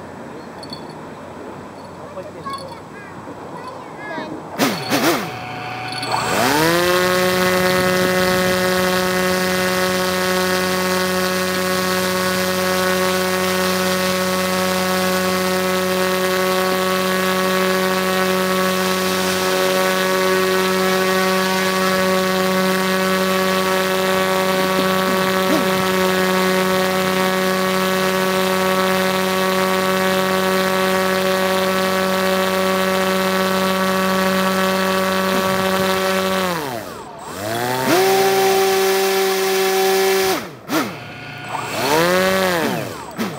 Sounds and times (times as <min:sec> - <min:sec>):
Motorboat, speedboat: 0:06.4 - 0:40.4.